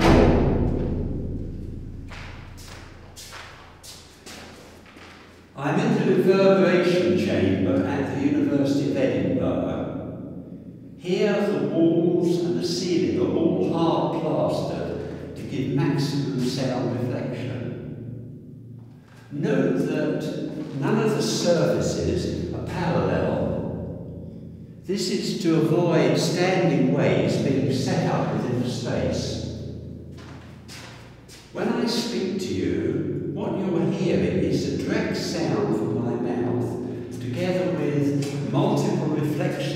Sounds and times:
Reverberation: 0.0s - 39.7s
Speech: 5.5s - 10.0s, 11.0s - 17.8s, 19.2s - 23.7s, 24.8s - 29.4s, 30.7s - 39.7s.

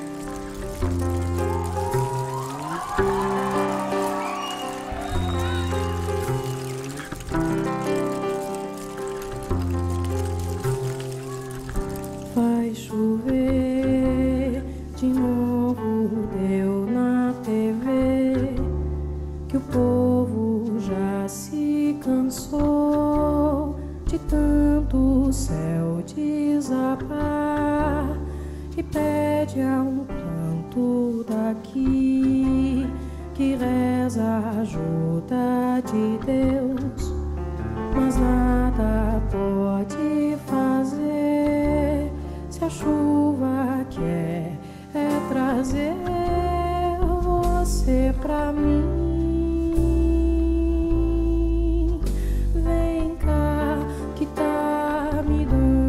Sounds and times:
Music: 0.0s - 55.8s.

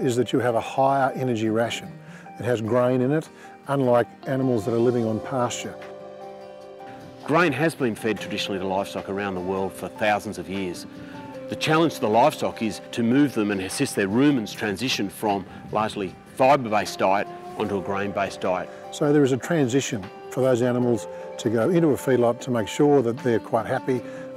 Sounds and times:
Speech: 0.0s - 5.9s, 7.3s - 10.9s, 11.5s - 24.0s
Music: 0.0s - 24.3s.

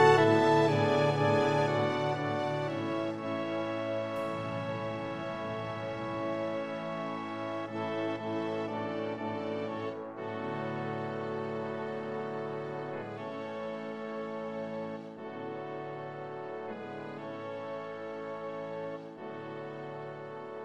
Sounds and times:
Music: 0.0s - 20.6s.

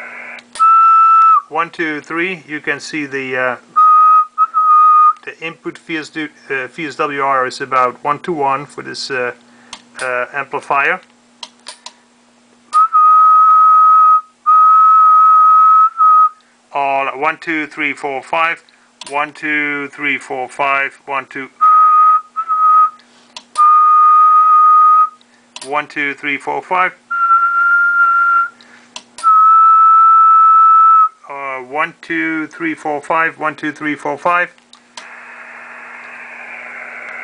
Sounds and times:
Radio: 0.0s - 0.5s, 35.0s - 37.2s
Speech: 1.4s - 3.7s, 5.2s - 9.4s, 10.0s - 11.1s, 16.7s - 21.6s, 25.6s - 27.0s, 31.2s - 34.6s.

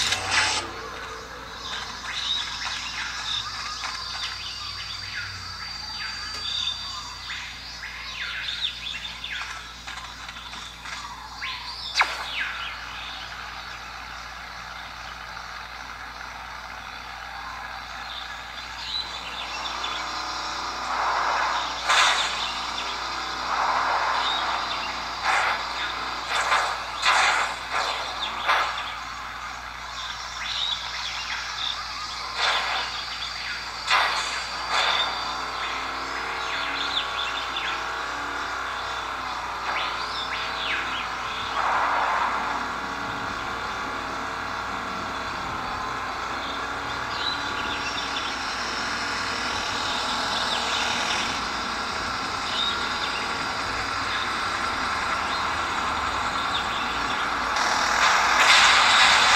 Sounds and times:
Chirp, tweet: 1.6s - 15.3s, 28.0s - 33.8s.

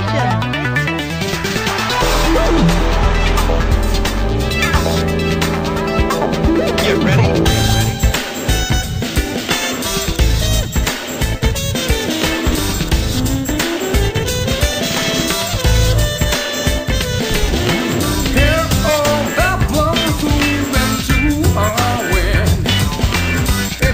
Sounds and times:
Music: 0.0s - 23.9s.

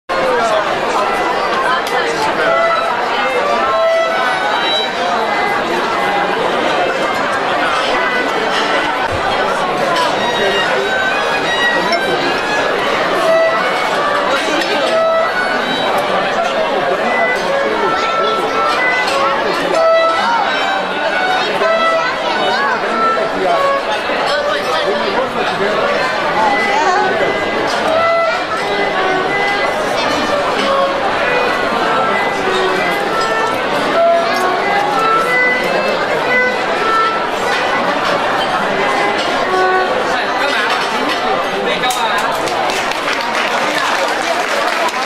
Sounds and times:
Violin, fiddle: 0.1s - 42.6s
Speech: 0.1s - 45.0s.

